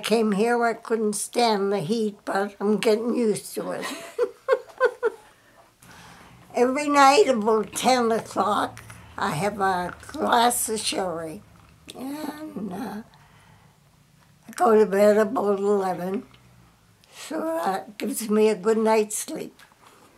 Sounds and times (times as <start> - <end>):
Speech: 0.0 - 4.0, 6.5 - 13.1, 14.5 - 16.2, 17.2 - 19.6.